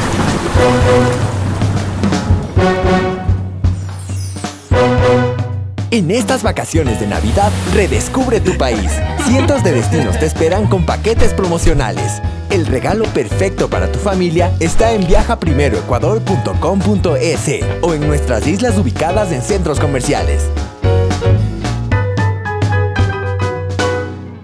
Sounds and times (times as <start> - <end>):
Music: 0.2 - 24.4
Speech: 5.9 - 20.5.